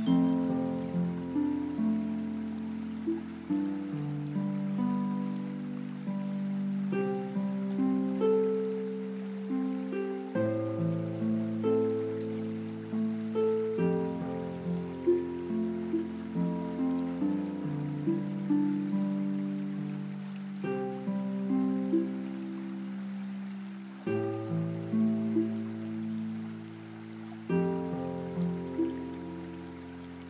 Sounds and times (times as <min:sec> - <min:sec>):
Music: 0:00.0 - 0:30.2.